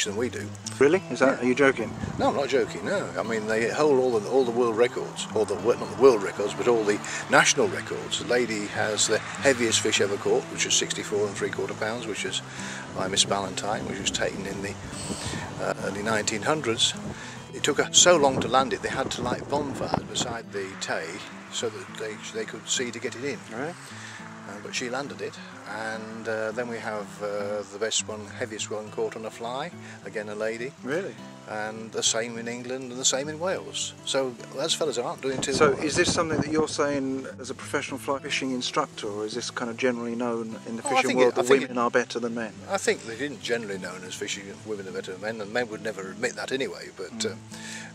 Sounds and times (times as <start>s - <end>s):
Speech: 0.0s - 14.8s, 15.6s - 23.8s, 24.5s - 47.4s
Music: 0.0s - 47.9s.